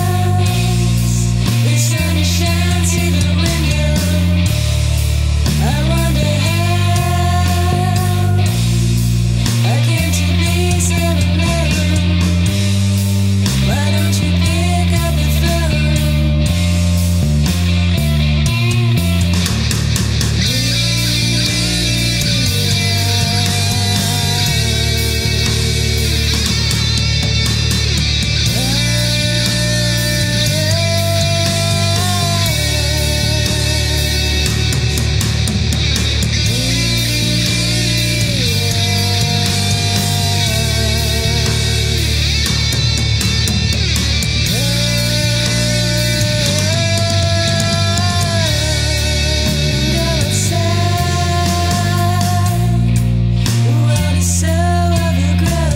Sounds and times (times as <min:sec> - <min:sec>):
Progressive rock: 0:00.0 - 0:55.7.